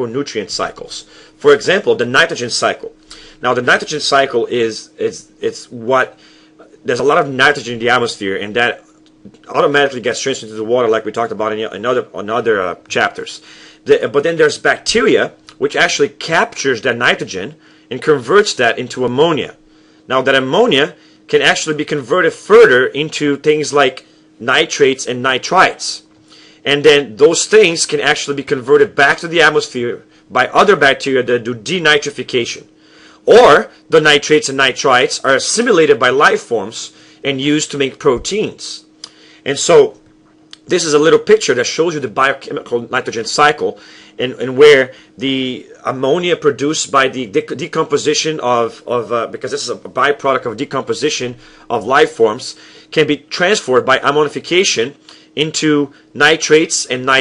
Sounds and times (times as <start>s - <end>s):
Speech: 0.0s - 40.0s, 40.6s - 57.2s.